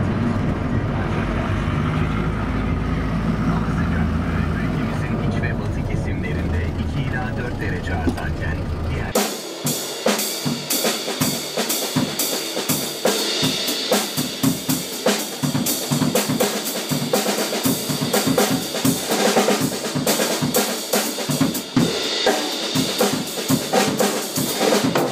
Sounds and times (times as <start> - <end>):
Music: 9.1 - 25.1.